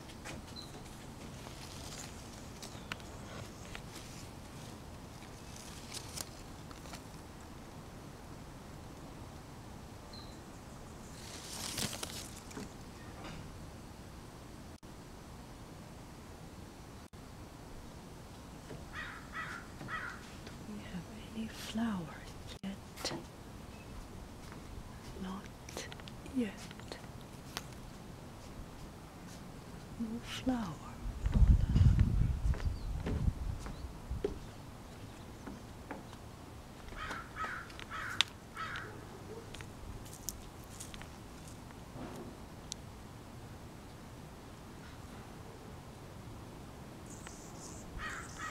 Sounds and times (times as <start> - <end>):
Outside, rural or natural: 0.0 - 48.5
Speech: 20.7 - 23.2, 25.1 - 27.1, 30.0 - 31.0.